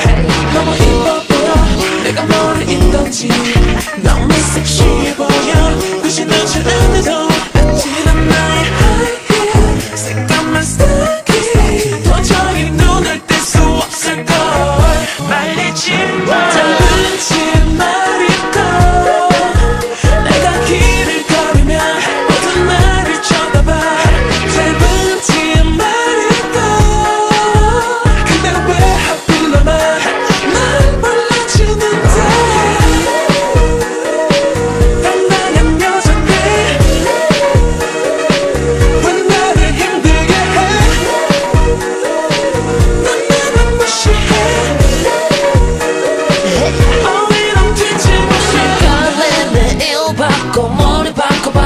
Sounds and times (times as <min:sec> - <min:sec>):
Music: 0:00.0 - 0:51.6
Singing: 0:00.0 - 0:51.6.